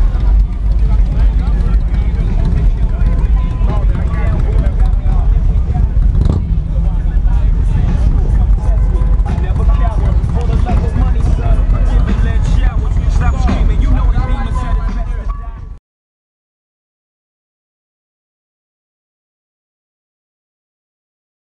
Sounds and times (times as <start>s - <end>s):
Music: 0.0s - 15.8s
Speech: 0.0s - 15.8s
Vehicle: 0.0s - 15.8s.